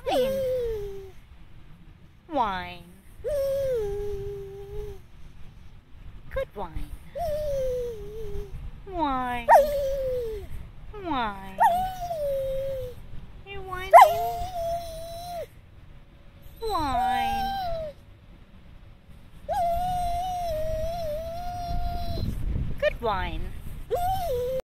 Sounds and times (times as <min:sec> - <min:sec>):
Speech: 0:00.0 - 0:00.6, 0:02.3 - 0:03.0, 0:06.3 - 0:07.0, 0:08.9 - 0:09.5, 0:11.0 - 0:11.6, 0:13.4 - 0:14.4, 0:16.6 - 0:17.7, 0:22.8 - 0:23.6.